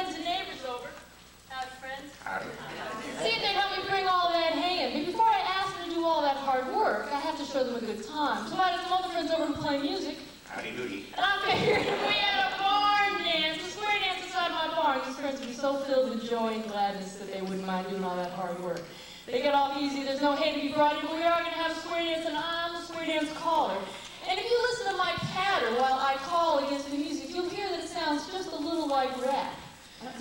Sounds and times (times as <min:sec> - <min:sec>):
Speech: 0:00.0 - 0:30.2.